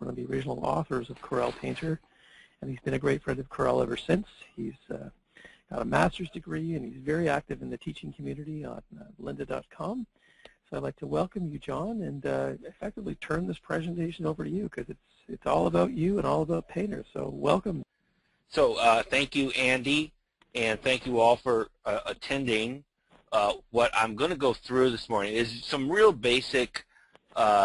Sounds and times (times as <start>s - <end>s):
Speech: 0.0s - 17.9s, 18.5s - 22.8s, 23.4s - 27.6s.